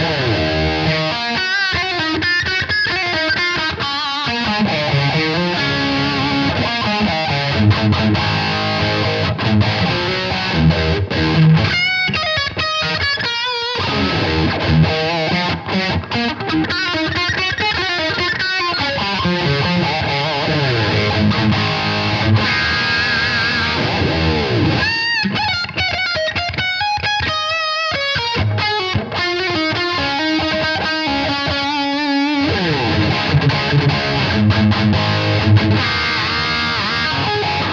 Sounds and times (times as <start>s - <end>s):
Heavy metal: 0.0s - 1.9s, 18.2s - 25.5s, 30.7s - 37.7s
Electric guitar: 0.0s - 37.7s.